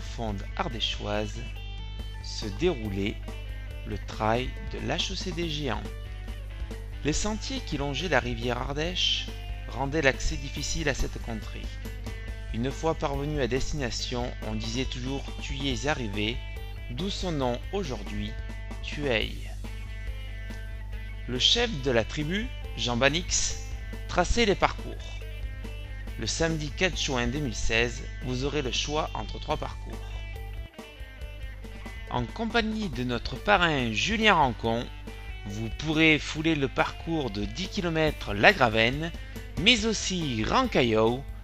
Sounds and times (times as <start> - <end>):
Speech: 0.0 - 1.5, 2.2 - 3.2, 3.9 - 5.9, 7.0 - 11.8, 12.5 - 19.6, 21.3 - 25.2, 26.2 - 30.2, 32.1 - 41.3
Music: 0.0 - 41.4.